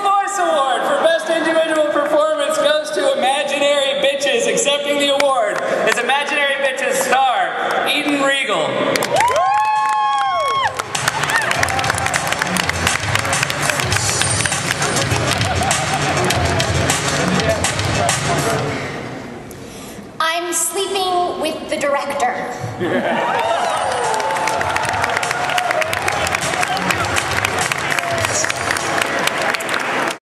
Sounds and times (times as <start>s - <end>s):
Music: 9.3s - 19.1s, 23.4s - 30.2s
Female speech, woman speaking: 20.2s - 22.5s.